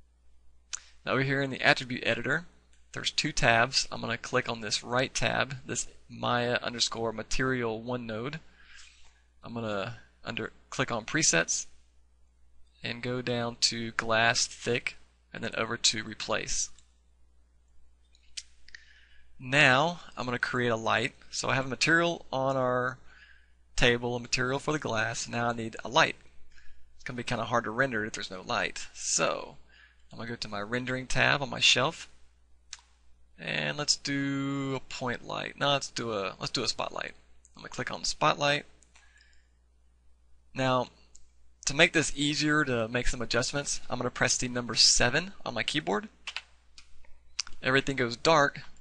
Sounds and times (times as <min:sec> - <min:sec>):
Speech: 0:01.0 - 0:08.5, 0:09.4 - 0:11.8, 0:12.8 - 0:16.8, 0:19.4 - 0:23.1, 0:23.8 - 0:26.3, 0:27.1 - 0:32.2, 0:33.4 - 0:38.7, 0:40.5 - 0:41.0, 0:41.6 - 0:46.2, 0:47.4 - 0:48.8.